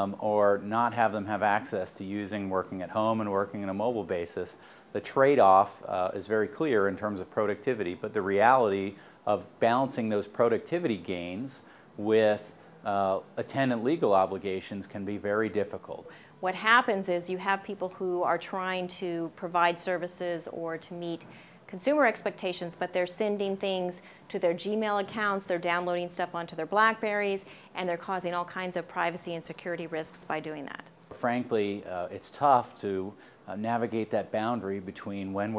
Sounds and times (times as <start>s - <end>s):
Speech: 0.0s - 35.5s.